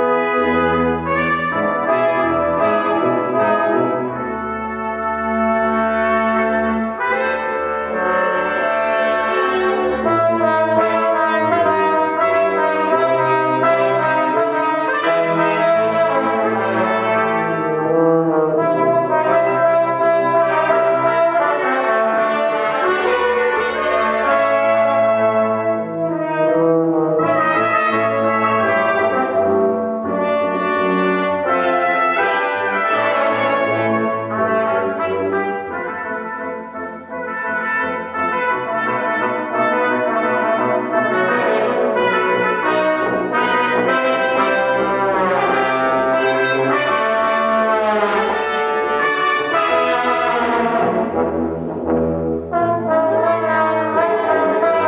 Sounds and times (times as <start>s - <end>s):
Brass instrument: 0.0s - 54.8s.